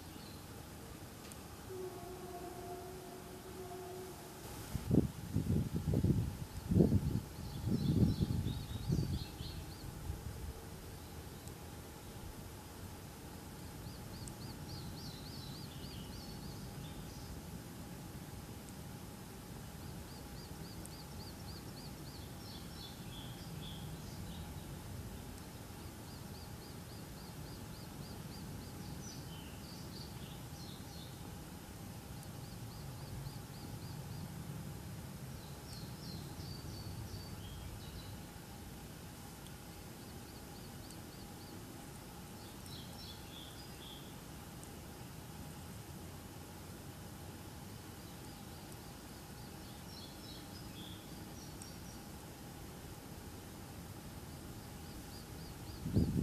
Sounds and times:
Environmental noise: 0.0s - 56.2s
Insect: 0.0s - 56.2s.

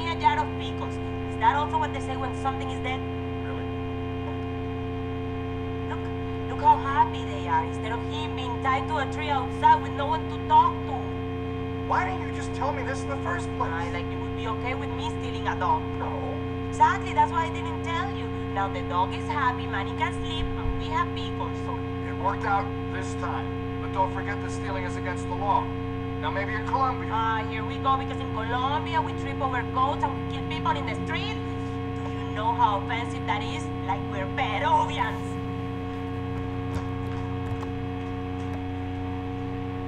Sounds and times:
Speech: 0.0s - 3.7s, 5.9s - 11.1s, 11.9s - 31.6s, 32.2s - 35.3s.

